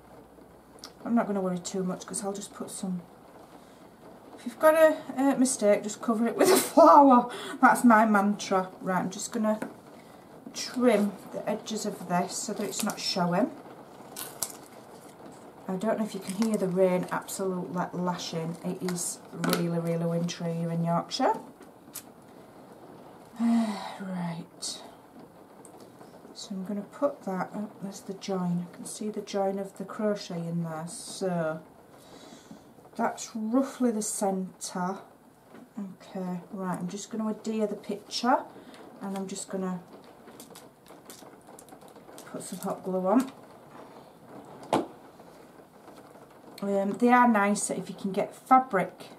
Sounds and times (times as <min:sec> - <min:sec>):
Inside, small room: 0:00.0 - 0:49.1
Speech: 0:00.9 - 0:03.1, 0:04.4 - 0:09.7, 0:10.6 - 0:13.6, 0:15.7 - 0:21.5, 0:23.4 - 0:24.9, 0:26.4 - 0:31.7, 0:33.0 - 0:35.1, 0:35.8 - 0:39.9, 0:42.3 - 0:43.3, 0:46.6 - 0:49.1.